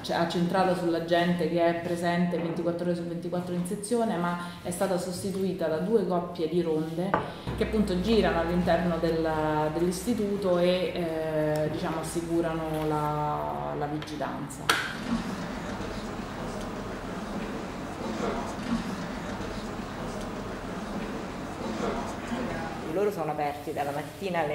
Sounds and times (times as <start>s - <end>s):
Speech: 0.0s - 14.7s.